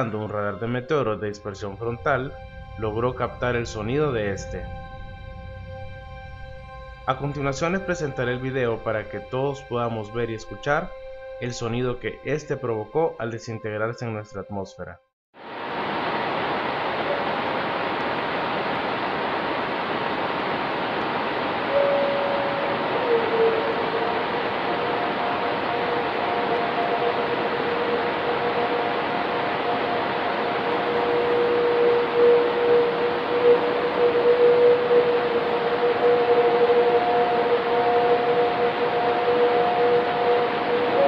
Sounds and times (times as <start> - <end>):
Speech: 0.0 - 4.7, 7.1 - 15.0.